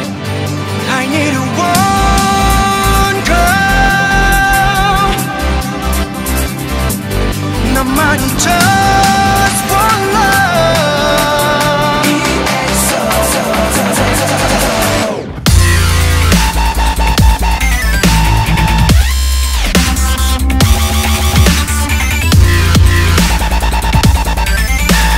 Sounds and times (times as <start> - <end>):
Dubstep: 0.0 - 25.1.